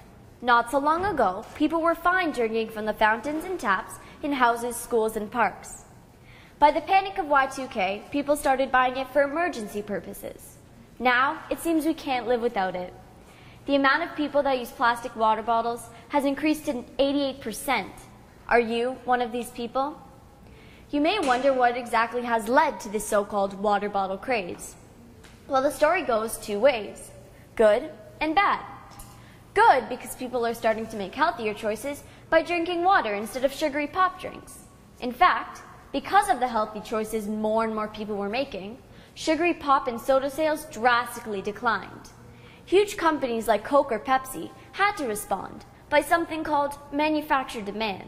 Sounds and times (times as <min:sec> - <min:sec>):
Narration, monologue: 0:00.0 - 0:48.0
Female speech, woman speaking: 0:00.4 - 0:05.8, 0:06.6 - 0:13.0, 0:13.7 - 0:20.0, 0:21.0 - 0:24.8, 0:25.5 - 0:28.6, 0:29.6 - 0:42.1, 0:42.7 - 0:48.0.